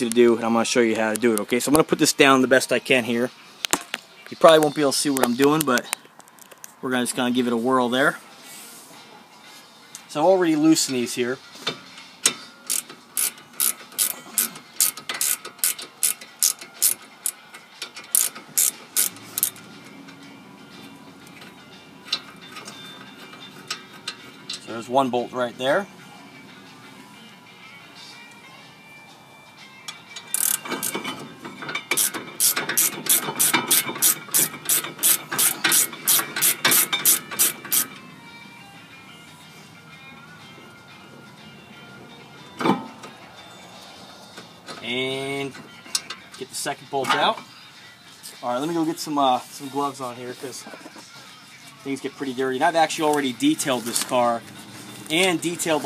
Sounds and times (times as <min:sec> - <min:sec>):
Speech: 0:00.0 - 0:03.3, 0:04.3 - 0:05.9, 0:24.7 - 0:25.9, 0:48.4 - 0:50.7, 0:51.8 - 0:54.4, 0:55.1 - 0:55.8
Music: 0:00.0 - 0:55.8.